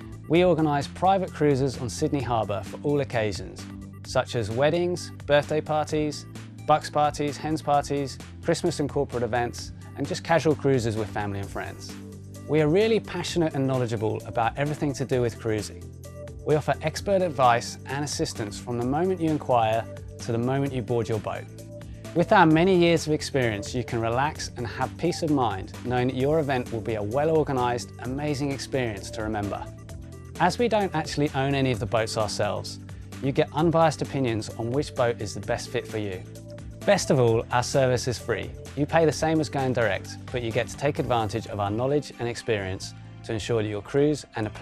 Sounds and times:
Music: 0.0s - 44.6s
Speech: 0.3s - 15.8s, 16.5s - 21.5s, 22.2s - 29.7s, 30.4s - 36.3s, 36.9s - 44.6s.

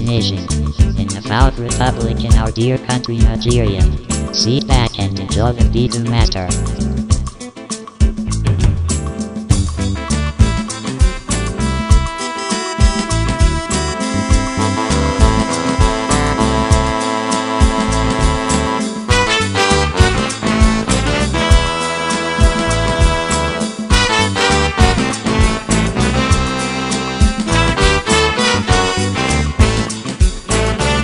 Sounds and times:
Speech: 0.0s - 6.6s
Reggae: 0.0s - 31.0s.

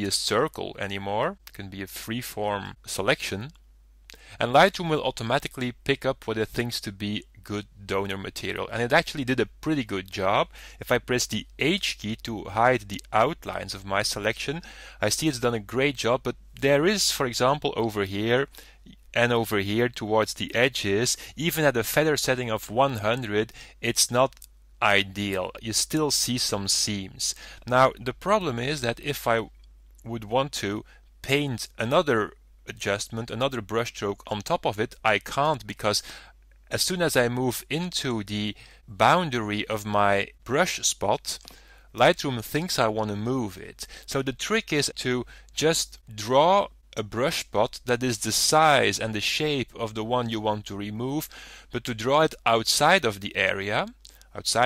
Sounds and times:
Speech: 0.0s - 3.6s, 4.4s - 36.0s, 36.7s - 54.6s.

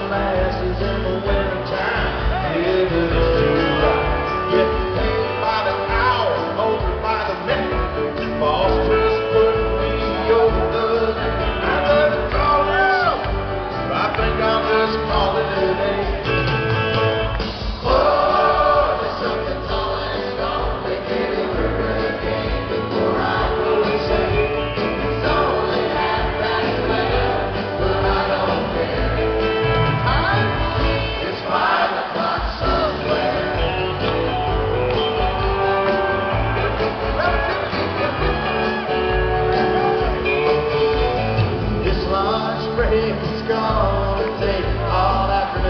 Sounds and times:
Music: 0.0s - 45.6s.

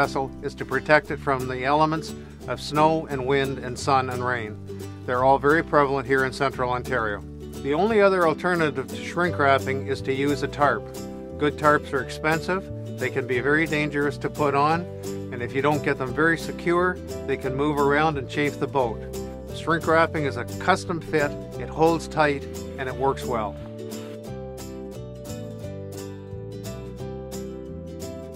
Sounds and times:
Speech: 0.0s - 10.8s, 11.4s - 19.0s, 19.6s - 23.6s
Music: 0.0s - 28.3s.

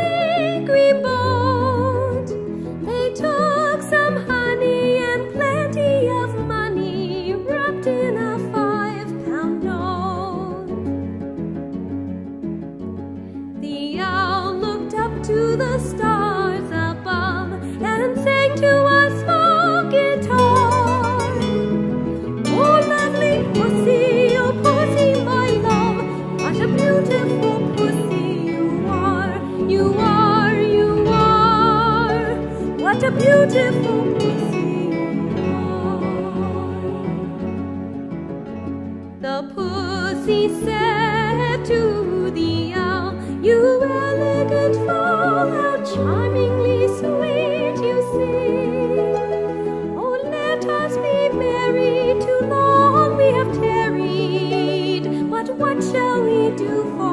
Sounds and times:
Music: 0.0s - 57.1s.

